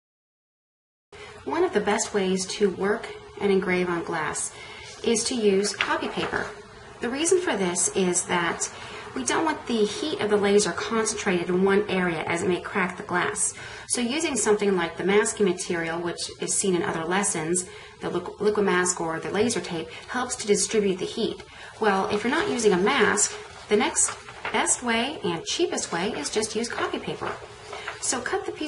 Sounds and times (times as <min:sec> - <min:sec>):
Speech: 0:01.5 - 0:27.4, 0:28.0 - 0:28.6.